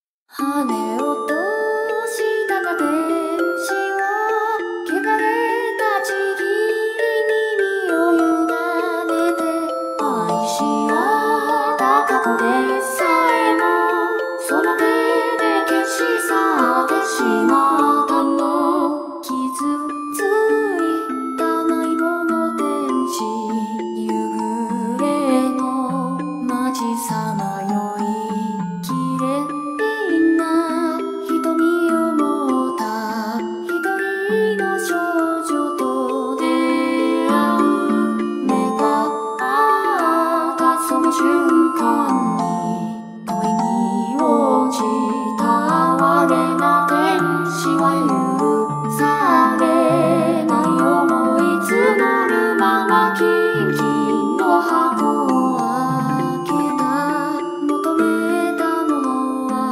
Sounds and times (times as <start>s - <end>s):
Soul music: 36.6s - 58.6s.